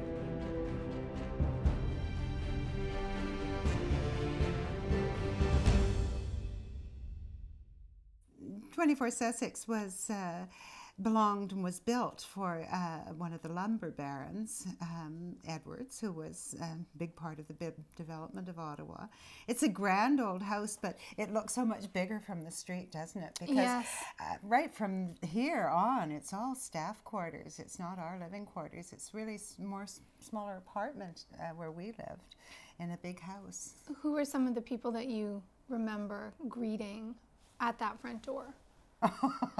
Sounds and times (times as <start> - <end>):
Speech: 11.1 - 32.2.